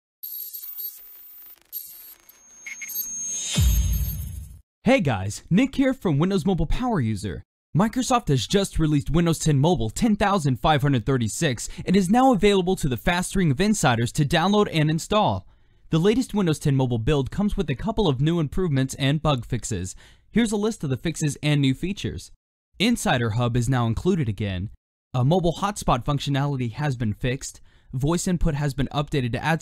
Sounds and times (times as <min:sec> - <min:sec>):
Speech: 0:04.8 - 0:29.6.